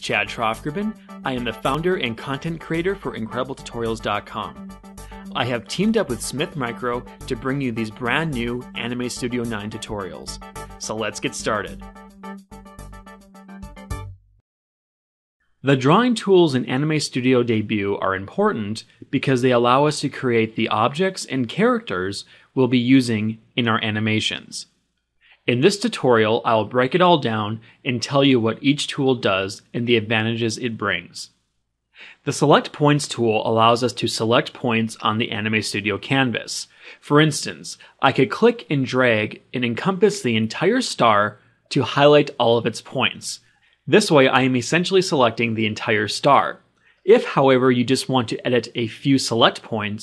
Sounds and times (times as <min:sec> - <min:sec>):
Speech: 0:00.0 - 0:04.6, 0:05.4 - 0:11.8, 0:15.7 - 0:24.7, 0:25.4 - 0:31.4, 0:32.2 - 0:50.0.